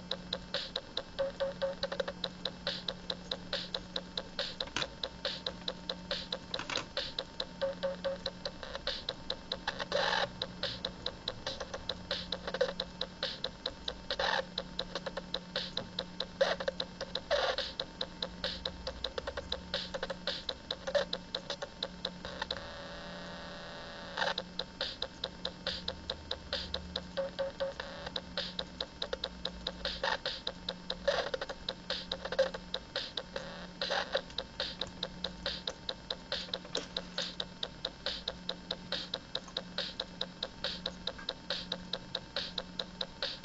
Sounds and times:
Drum machine: 0.0s - 43.4s.

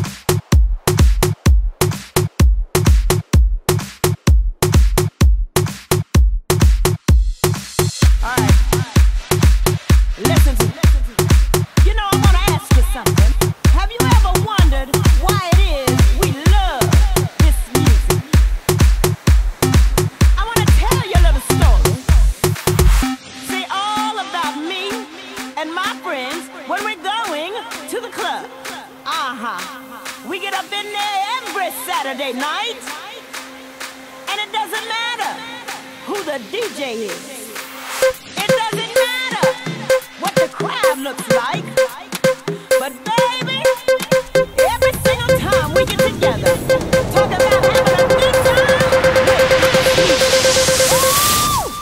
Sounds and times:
Dance music: 0.0s - 51.8s.

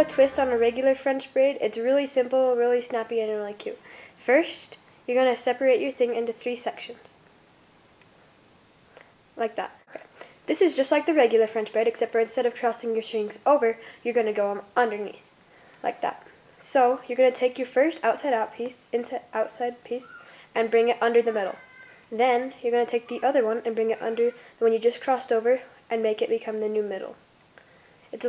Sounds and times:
Speech: 0.0s - 7.2s, 9.4s - 27.2s.

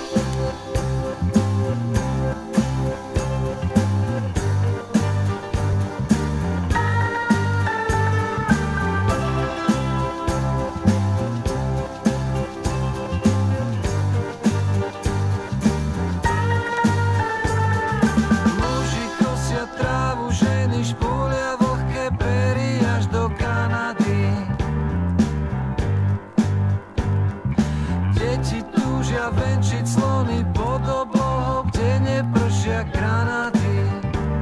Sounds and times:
Music: 0.0s - 34.4s.

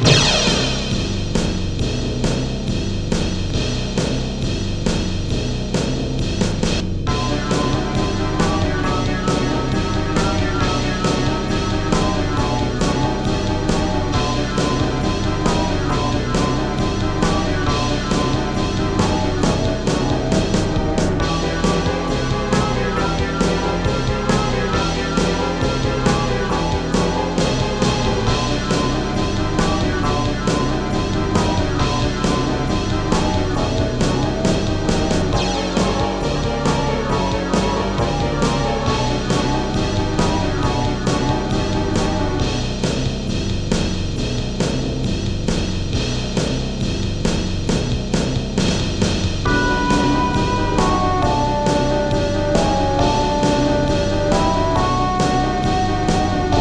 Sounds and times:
Background music: 0.0s - 56.6s.

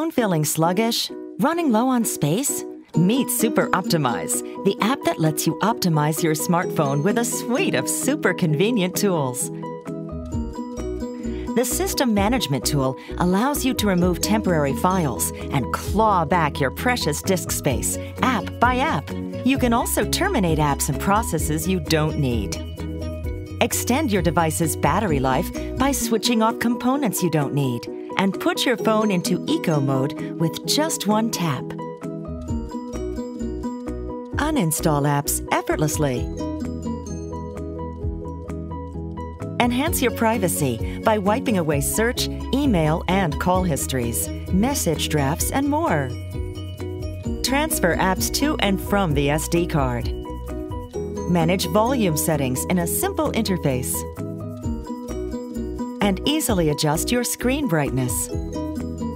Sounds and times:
Speech: 0.0s - 9.5s, 11.5s - 22.6s, 23.6s - 31.8s, 34.4s - 36.3s, 39.6s - 46.1s, 47.5s - 50.1s, 51.3s - 54.1s, 56.0s - 58.3s
Music: 0.0s - 59.1s.

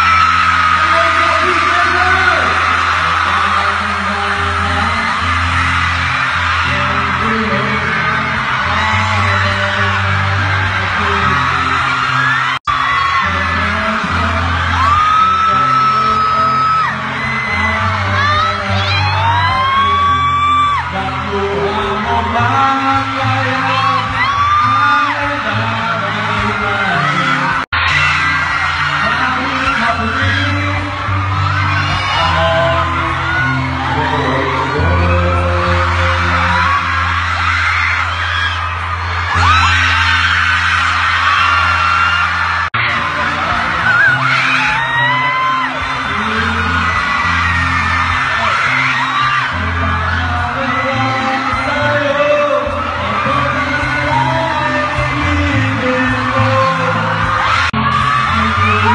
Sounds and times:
Inside, large room or hall: 0.0s - 58.9s
Music: 0.0s - 58.9s
Singing: 6.6s - 37.0s, 42.8s - 58.9s.

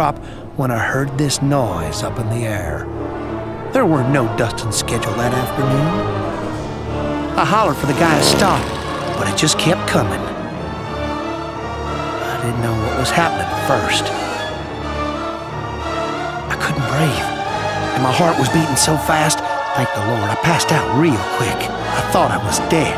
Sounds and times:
Speech: 0.0s - 2.8s, 3.7s - 6.0s, 7.4s - 10.3s, 12.2s - 14.2s, 16.5s - 17.4s, 18.0s - 22.9s
Music: 0.0s - 22.9s.

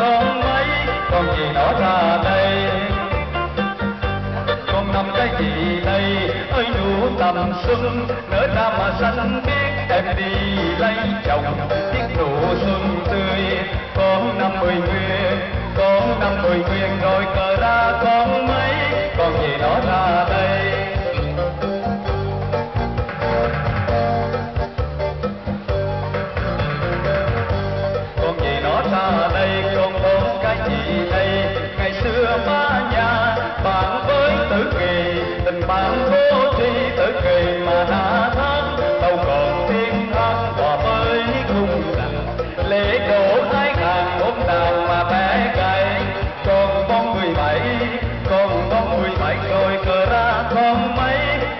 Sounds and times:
Male singing: 0.0s - 22.0s, 28.2s - 51.5s
Music: 0.0s - 51.5s.

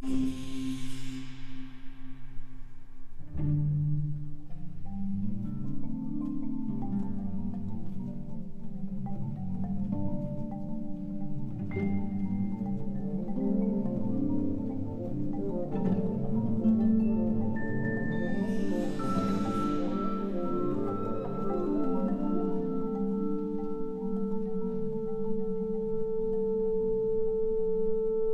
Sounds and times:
Music: 0.0s - 28.3s.

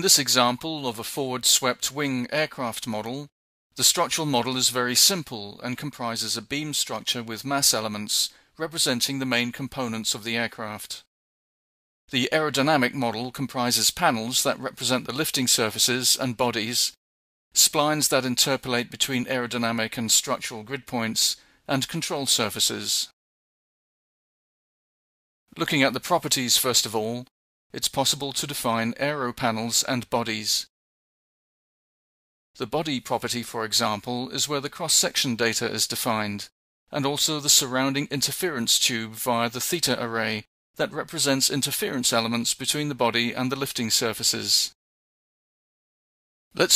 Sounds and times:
Speech: 0.0s - 11.1s, 12.1s - 17.0s, 17.6s - 23.2s, 25.5s - 30.7s, 32.6s - 44.8s.

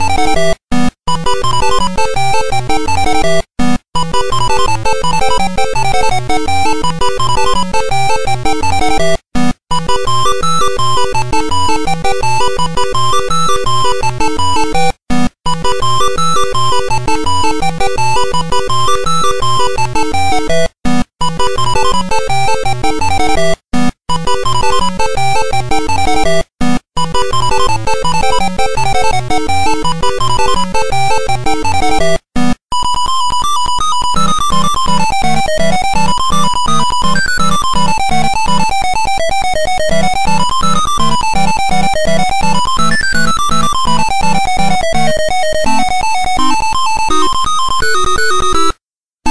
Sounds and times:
Music: 0.0s - 32.5s, 33.9s - 49.3s.

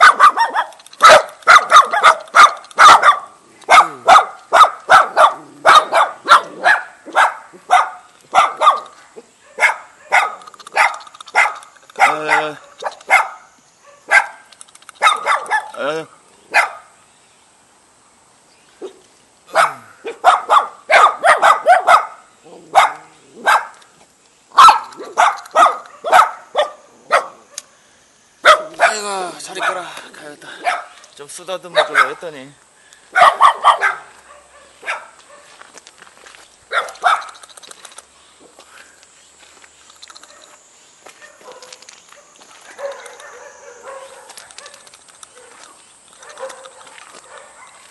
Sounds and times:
Bow-wow: 0.0s - 14.4s, 15.0s - 15.8s, 19.5s - 23.8s, 24.6s - 27.7s, 28.5s - 29.8s, 31.8s - 32.2s, 33.2s - 35.6s, 41.2s - 45.6s, 46.2s - 47.9s
Speech: 12.0s - 12.6s, 28.8s - 30.6s, 31.2s - 32.6s.

